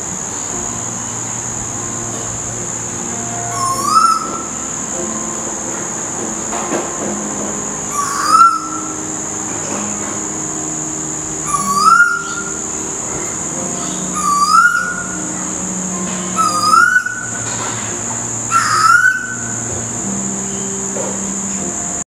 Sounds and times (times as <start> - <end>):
Bird vocalization, bird call, bird song: 3.2 - 5.4, 7.8 - 10.2, 11.2 - 21.7.